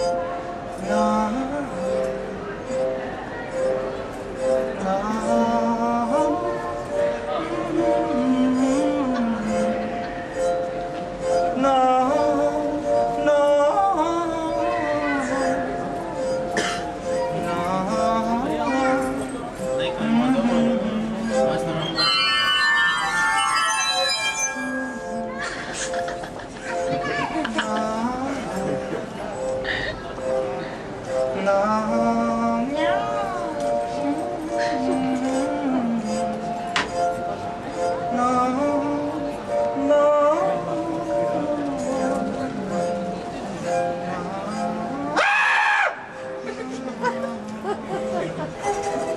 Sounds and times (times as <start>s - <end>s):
Music: 0.0s - 49.1s.